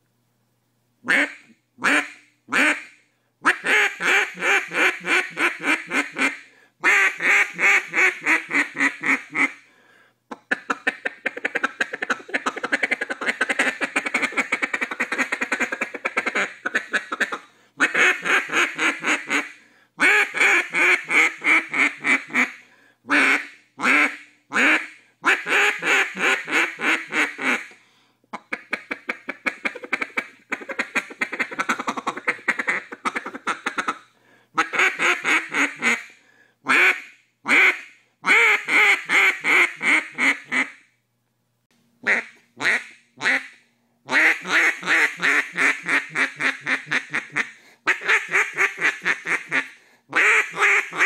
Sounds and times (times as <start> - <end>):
Quack: 1.1 - 9.6, 10.3 - 27.8, 28.4 - 34.0, 34.6 - 40.8, 42.0 - 51.0.